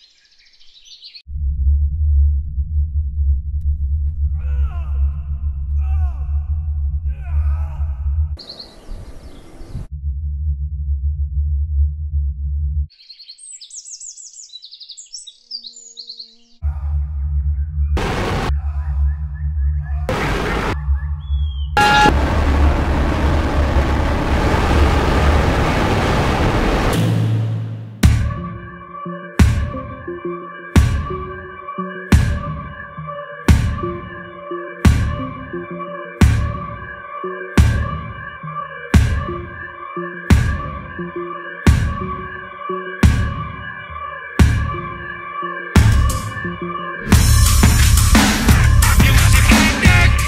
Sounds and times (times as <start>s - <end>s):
Soundtrack music: 18.0s - 18.7s, 21.8s - 50.2s.